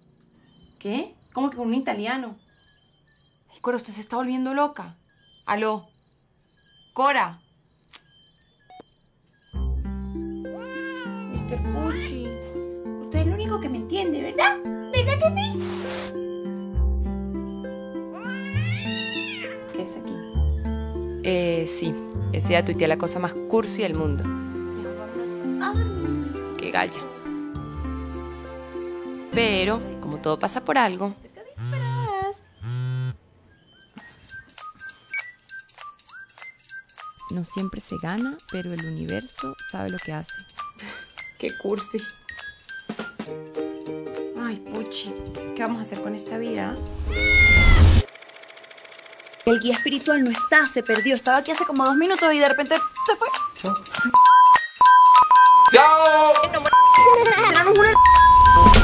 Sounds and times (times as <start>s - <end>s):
Speech: 0.8s - 2.4s, 21.2s - 24.3s, 37.3s - 40.4s, 41.4s - 42.1s, 49.5s - 53.8s, 55.7s - 58.0s
Music: 9.4s - 32.5s, 33.5s - 48.0s, 49.4s - 58.8s.